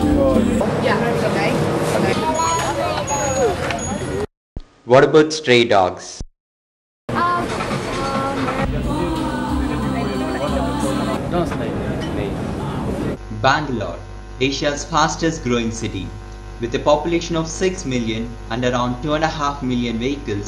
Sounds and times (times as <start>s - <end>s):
Music: 0.0s - 0.6s, 8.6s - 11.2s
Speech: 4.9s - 6.2s, 9.8s - 20.4s.